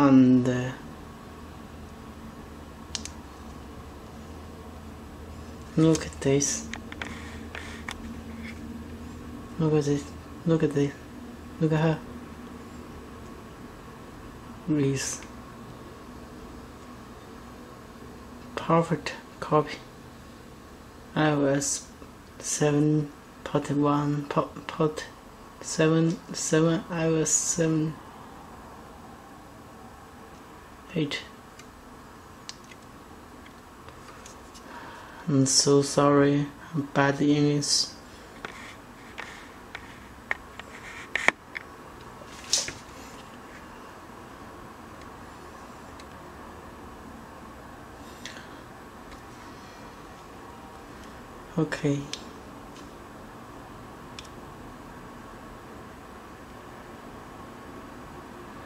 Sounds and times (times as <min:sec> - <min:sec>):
Inside, small room: 0:00.0 - 0:58.6.